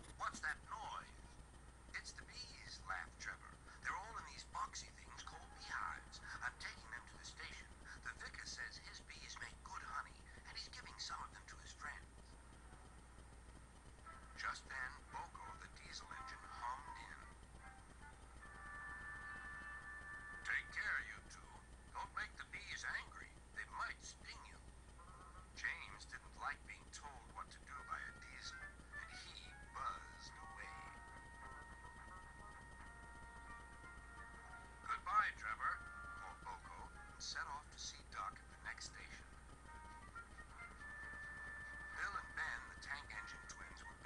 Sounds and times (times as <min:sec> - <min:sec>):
Speech: 0:00.1 - 0:01.2, 0:02.0 - 0:12.1, 0:14.4 - 0:17.3, 0:20.5 - 0:24.6, 0:25.6 - 0:31.0, 0:34.9 - 0:39.3, 0:42.0 - 0:44.0
Music: 0:01.9 - 0:13.3, 0:13.9 - 0:23.1, 0:23.7 - 0:44.0.